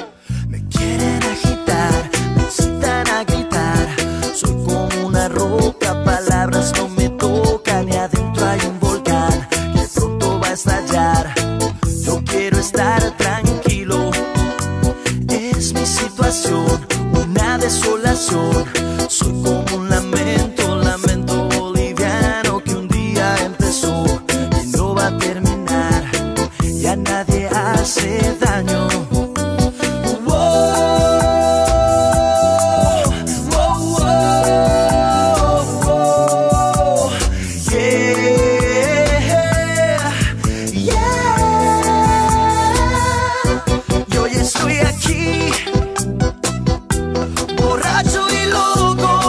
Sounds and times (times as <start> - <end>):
Afrobeat: 0.0 - 49.2.